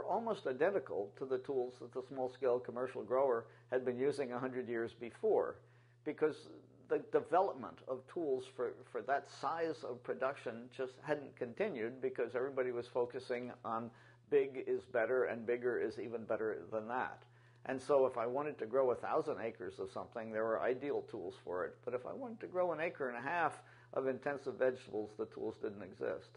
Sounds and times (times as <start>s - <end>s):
Speech: 0.0s - 26.3s.